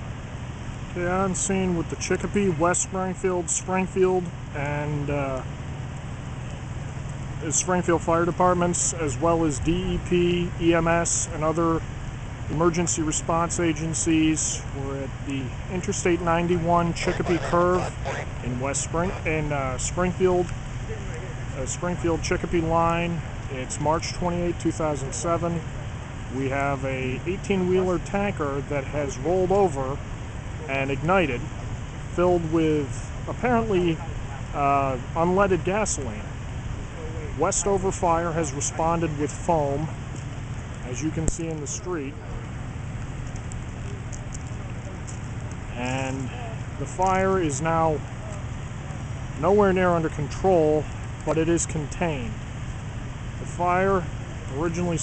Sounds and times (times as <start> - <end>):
Speech: 0.9 - 5.5, 7.4 - 11.9, 12.5 - 30.0, 30.6 - 31.5, 32.1 - 36.3, 36.9 - 40.0, 40.8 - 42.5, 45.7 - 48.4, 49.4 - 52.4, 53.4 - 55.0.